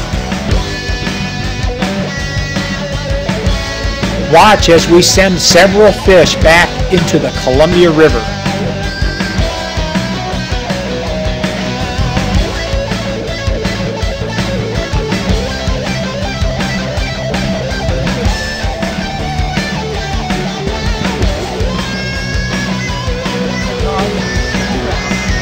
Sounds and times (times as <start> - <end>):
Progressive rock: 0.0 - 25.4.